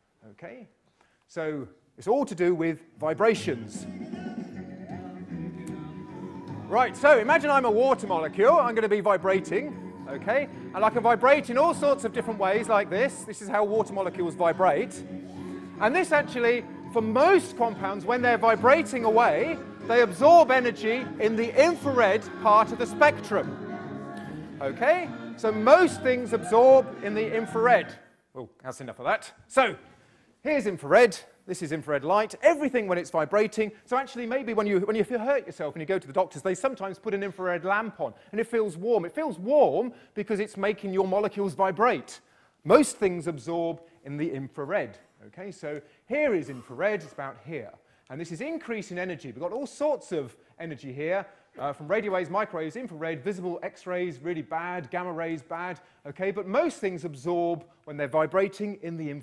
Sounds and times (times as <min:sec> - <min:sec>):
Speech: 0:00.2 - 0:03.8, 0:06.7 - 0:15.0, 0:15.8 - 0:23.4, 0:24.6 - 0:29.8, 0:30.4 - 0:59.2
Music: 0:02.0 - 0:28.2.